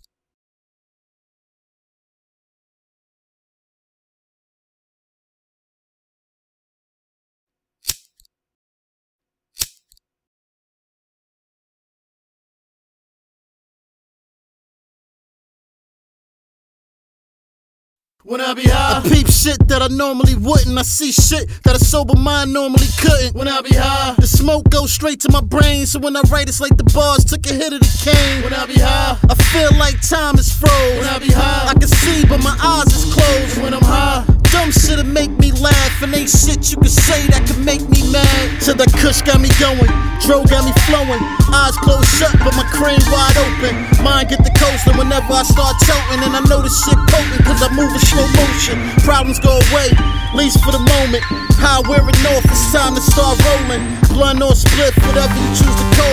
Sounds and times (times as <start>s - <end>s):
Music: 18.5s - 56.1s.